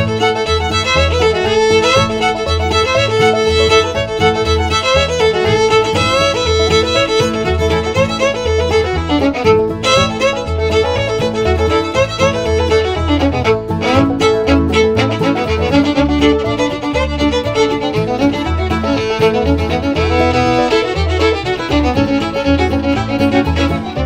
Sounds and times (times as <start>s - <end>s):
Violin, fiddle: 0.0s - 24.0s.